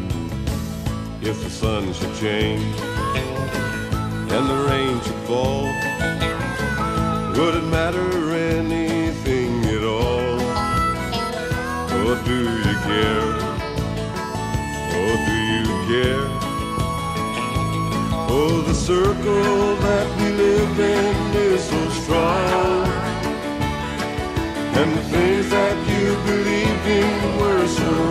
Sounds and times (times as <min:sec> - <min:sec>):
Music: 0:00.0 - 0:28.1.